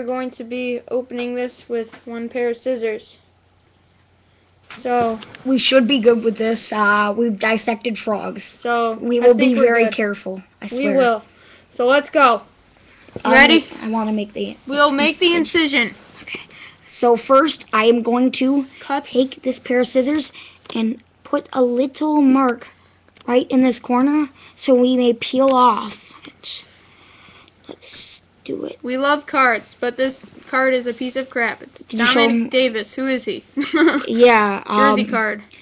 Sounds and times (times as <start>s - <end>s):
Speech: 0.0s - 3.2s, 4.8s - 12.5s, 13.2s - 16.0s, 27.7s - 33.4s, 34.0s - 35.5s.